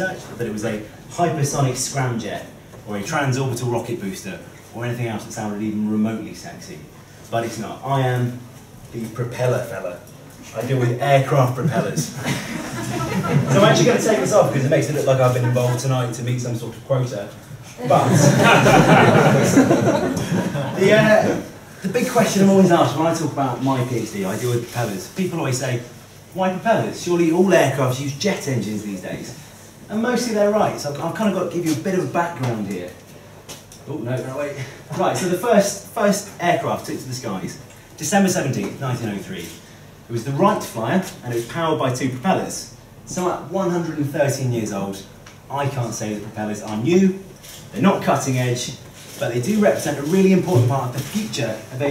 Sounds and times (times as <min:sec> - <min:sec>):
Speech: 0:00.0 - 0:12.2, 0:12.8 - 0:19.6, 0:20.6 - 0:33.0, 0:33.8 - 0:51.9.